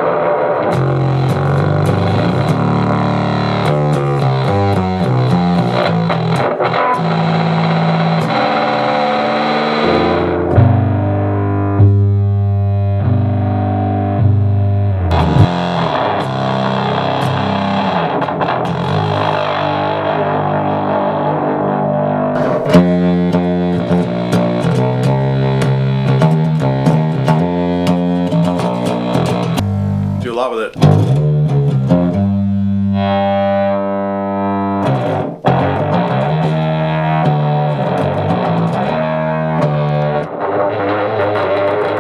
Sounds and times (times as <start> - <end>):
Distortion: 0.0 - 42.0
Music: 0.0 - 42.0.